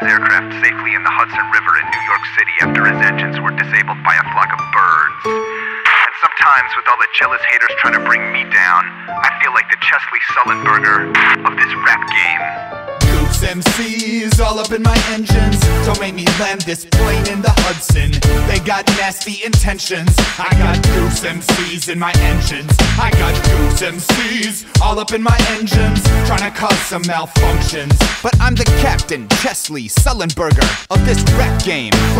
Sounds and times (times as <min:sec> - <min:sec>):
Music: 0:00.0 - 0:32.2.